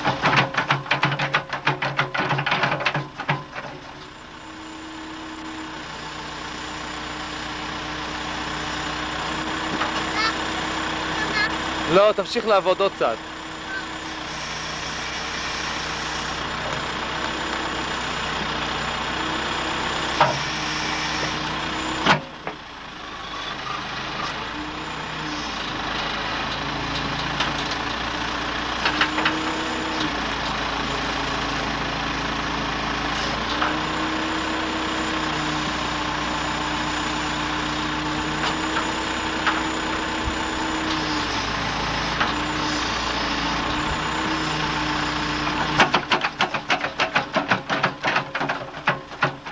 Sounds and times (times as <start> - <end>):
Truck: 0.0 - 49.5
Speech: 11.2 - 13.2.